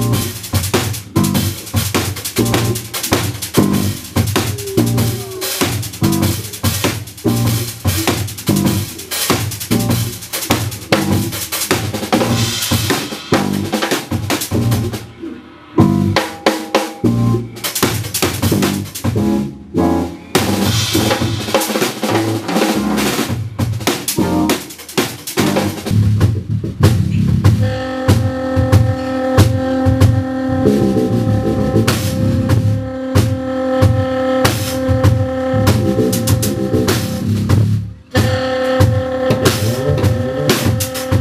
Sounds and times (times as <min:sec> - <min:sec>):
Drum kit: 0:00.0 - 0:41.2
Jazz: 0:00.0 - 0:41.2
Rimshot: 0:00.1 - 0:17.0, 0:20.4 - 0:26.0.